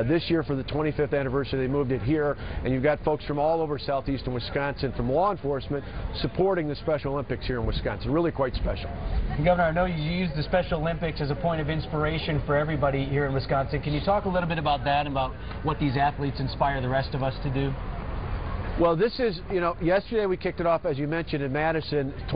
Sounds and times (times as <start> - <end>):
Speech: 0.0 - 17.8, 18.8 - 22.3.